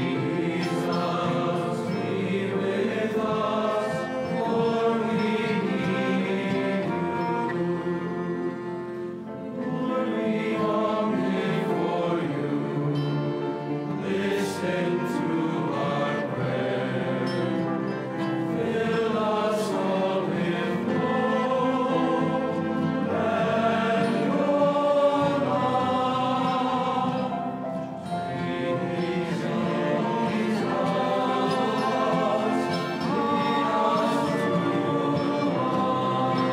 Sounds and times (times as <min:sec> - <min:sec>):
Cello: 0:00.0 - 0:36.5
Choir: 0:00.0 - 0:36.5
Classical music: 0:00.0 - 0:36.5.